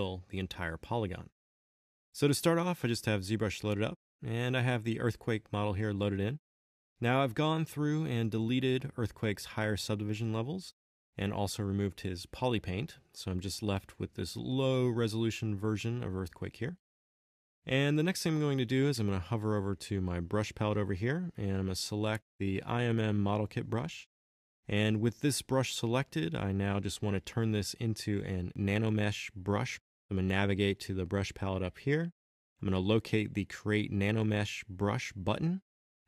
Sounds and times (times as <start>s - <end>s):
Speech: 0.0s - 1.3s, 2.2s - 6.4s, 7.0s - 16.8s, 17.7s - 24.1s, 24.7s - 35.7s.